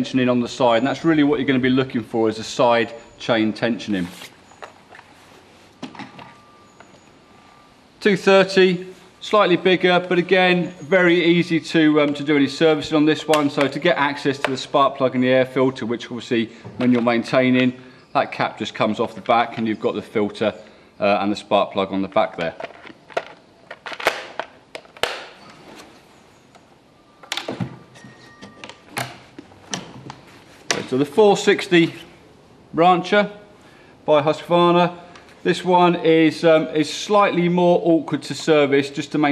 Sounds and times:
Speech: 0:00.0 - 0:04.2, 0:08.0 - 0:22.6, 0:30.8 - 0:32.1, 0:32.8 - 0:33.5, 0:34.1 - 0:39.3.

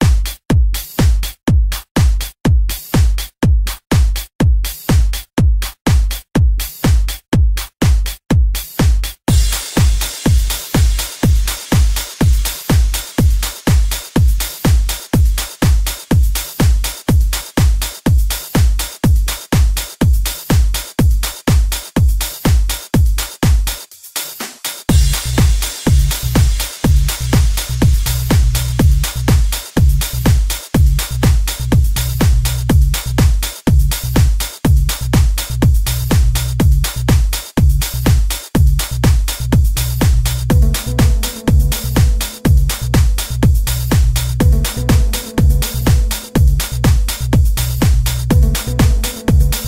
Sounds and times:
House music: 0:00.0 - 0:49.6.

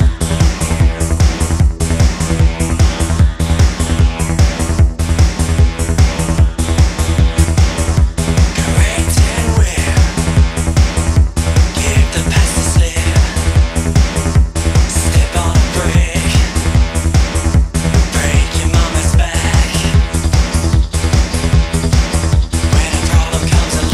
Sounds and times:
Music: 0:00.0 - 0:23.9.

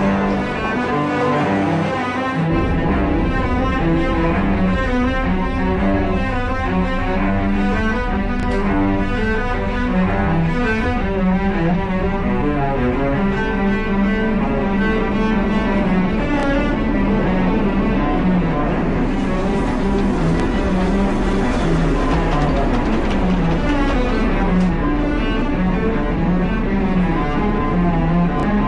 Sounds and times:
Cello: 0:00.0 - 0:28.6.

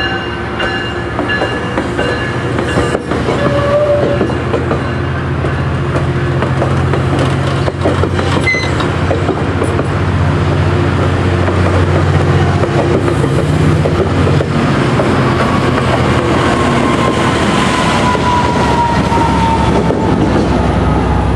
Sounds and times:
Railroad car, train wagon: 0:00.0 - 0:21.3
Train: 0:00.0 - 0:21.3.

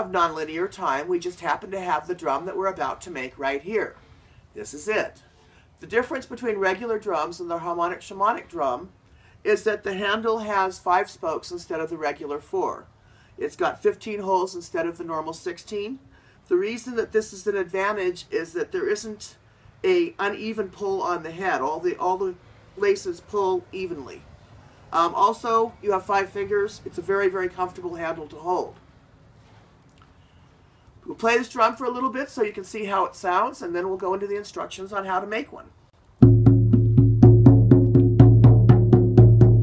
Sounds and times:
Speech: 0:00.0 - 0:04.0, 0:04.6 - 0:05.2, 0:05.8 - 0:24.3, 0:24.9 - 0:28.8, 0:31.0 - 0:35.8.

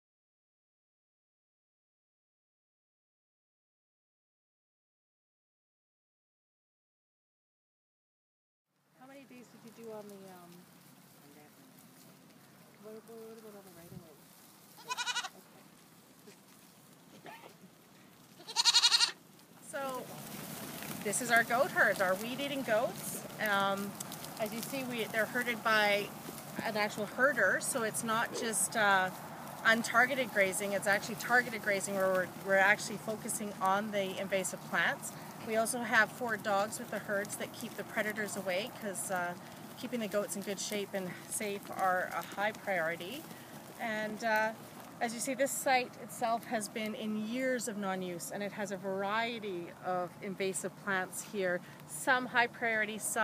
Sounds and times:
Outside, rural or natural: 0:08.7 - 0:53.2
Speech: 0:09.0 - 0:10.6, 0:11.2 - 0:11.7, 0:12.8 - 0:14.2, 0:19.7 - 0:20.1, 0:21.0 - 0:43.2, 0:43.8 - 0:53.2
Goat: 0:09.2 - 0:53.2.

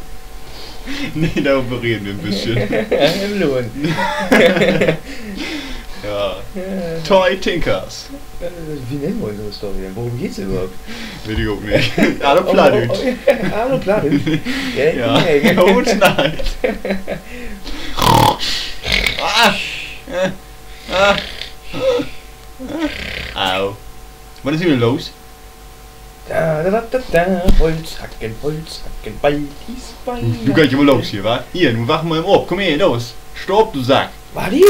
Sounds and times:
Speech: 0:01.2 - 0:03.9, 0:06.0 - 0:16.4, 0:26.3 - 0:34.6.

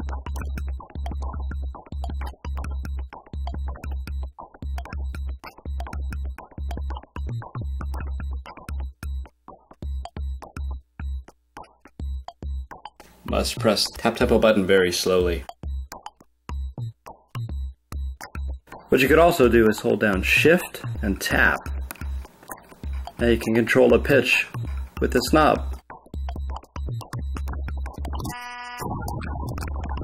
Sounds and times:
Music: 0:00.0 - 0:30.0.

